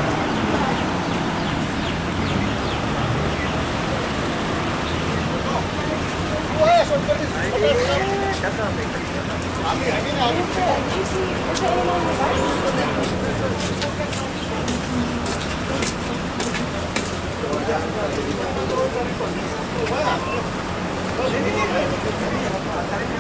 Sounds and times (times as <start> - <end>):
Vehicle: 0.0 - 23.2
Speech: 5.1 - 23.2.